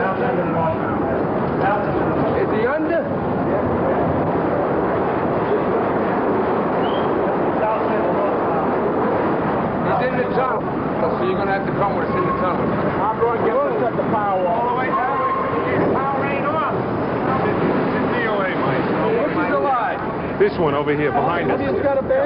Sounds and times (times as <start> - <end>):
Vehicle: 0.0 - 22.2.